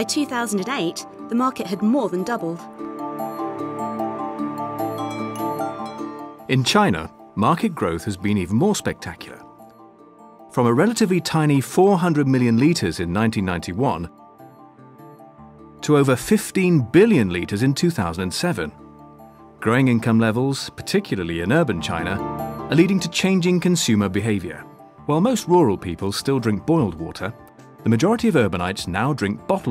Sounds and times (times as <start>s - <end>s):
Speech: 0.0s - 2.7s, 6.5s - 9.4s, 10.6s - 14.1s, 15.8s - 18.8s, 19.6s - 29.7s
Music: 0.0s - 29.7s.